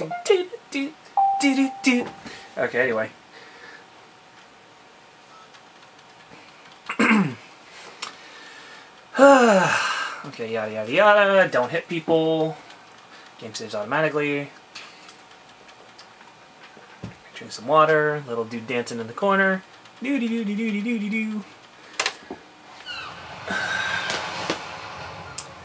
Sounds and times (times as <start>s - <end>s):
Speech: 0.0s - 3.2s, 9.2s - 12.6s, 13.4s - 14.6s, 17.4s - 21.5s.